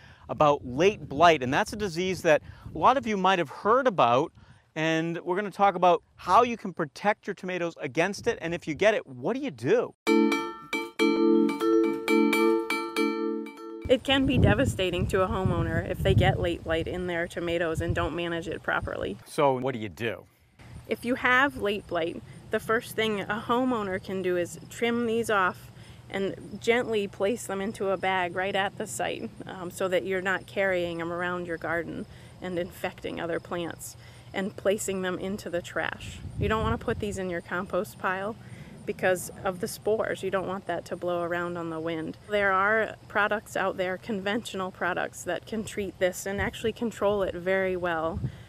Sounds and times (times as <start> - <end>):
Glockenspiel: 10.1 - 13.9
Marimba, xylophone: 10.1 - 13.9.